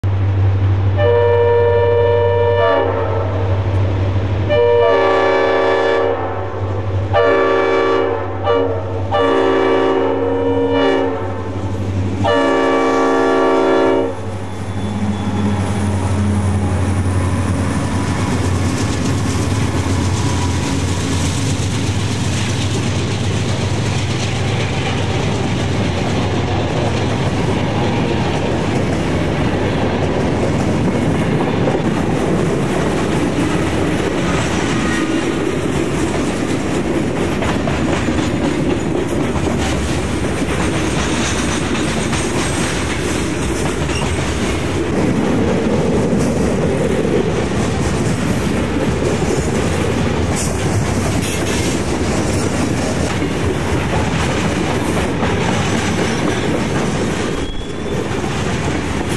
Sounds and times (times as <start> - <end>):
Railroad car, train wagon: 0.0 - 59.1
Train horn: 1.0 - 3.6, 4.5 - 17.0.